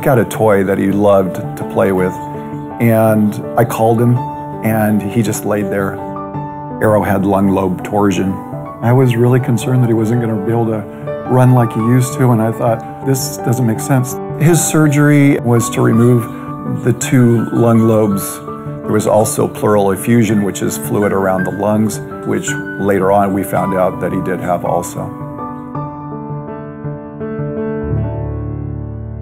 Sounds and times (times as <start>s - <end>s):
Speech: 0.0s - 2.2s, 2.8s - 6.0s, 6.8s - 25.1s
Music: 0.0s - 29.2s.